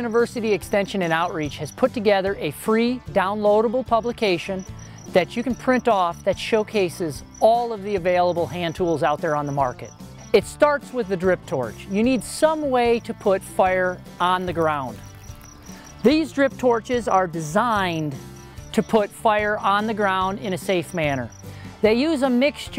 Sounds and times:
Speech: 0.0 - 15.0, 16.0 - 18.2, 18.8 - 22.7
Music: 0.0 - 22.7.

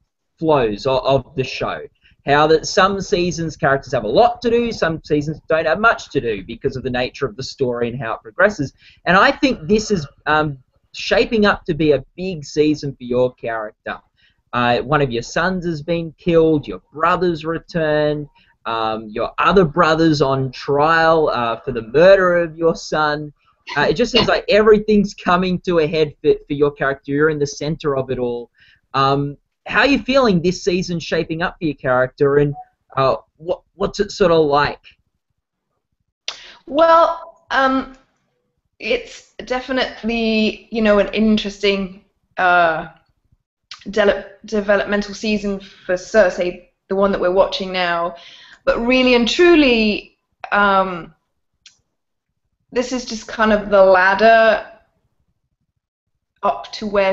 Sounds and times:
Speech: 0.4 - 14.0, 14.6 - 34.9, 36.3 - 38.0, 38.8 - 43.0, 43.7 - 51.1, 52.8 - 54.7, 56.4 - 57.1.

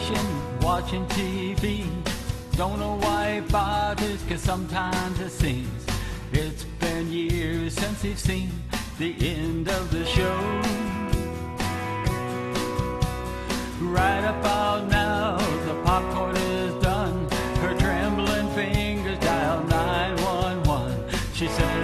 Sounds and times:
Music: 0.0 - 21.8.

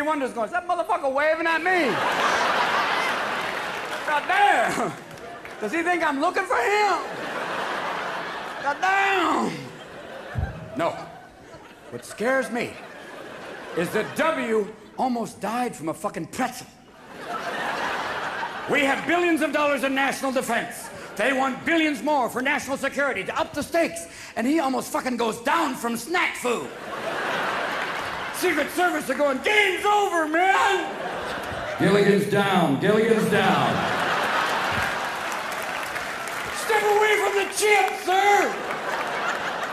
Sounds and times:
Speech: 0.0 - 2.0, 5.6 - 7.1, 11.9 - 12.8, 13.8 - 16.8, 18.7 - 26.7, 28.4 - 30.9, 31.8 - 33.9, 36.6 - 38.6.

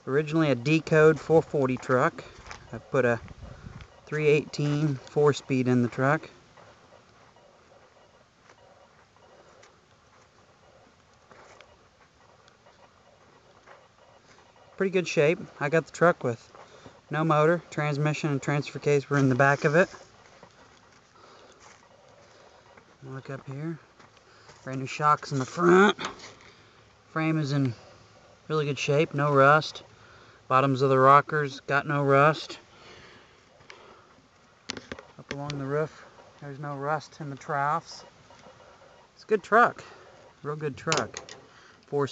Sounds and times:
Speech: 0.0 - 3.2, 4.1 - 6.3, 14.8 - 16.4, 17.1 - 20.0, 23.0 - 23.8, 24.6 - 26.1, 27.1 - 27.8, 28.5 - 29.8, 30.5 - 32.6, 35.2 - 38.1, 39.2 - 41.2.

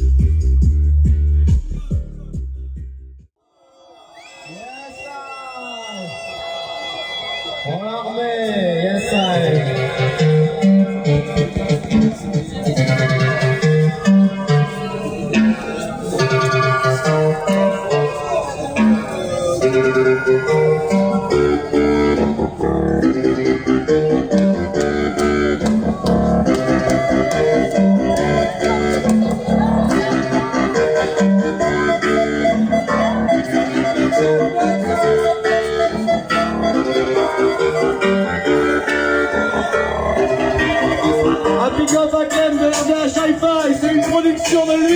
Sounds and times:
Music: 0.0 - 3.4, 9.0 - 44.9.

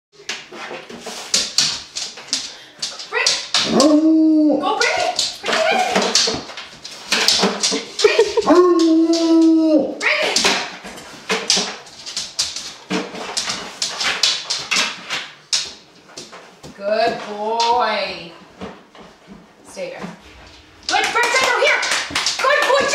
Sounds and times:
Canidae, dogs, wolves: 3.6 - 6.0.

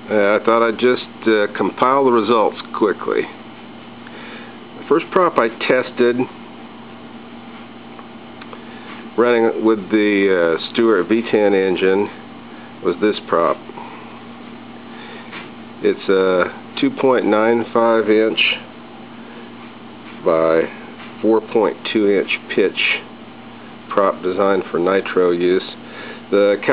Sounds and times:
Speech: 0.1 - 3.4, 4.8 - 6.4, 9.2 - 12.2, 12.8 - 13.6, 15.8 - 18.7, 20.2 - 23.1, 23.9 - 26.7.

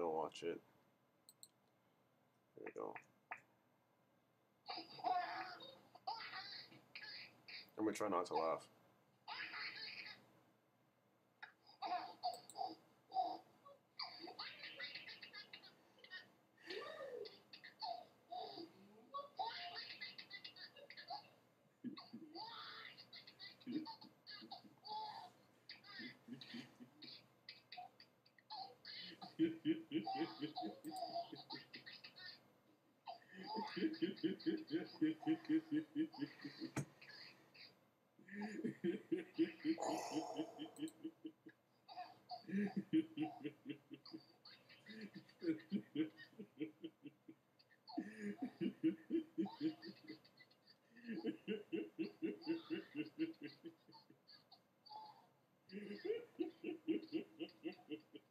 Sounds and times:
Snicker: 28.9 - 32.4, 33.1 - 37.3, 38.3 - 54.6, 55.7 - 58.3.

